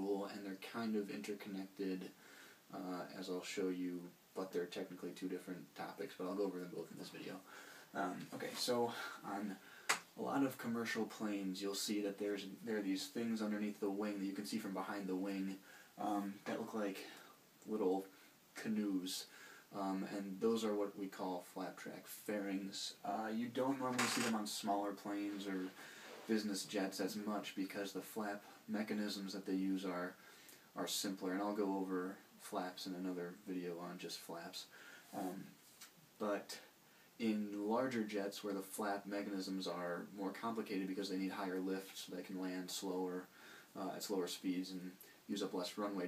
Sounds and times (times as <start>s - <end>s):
Speech: 0.0s - 9.6s, 10.2s - 35.6s, 36.2s - 46.0s.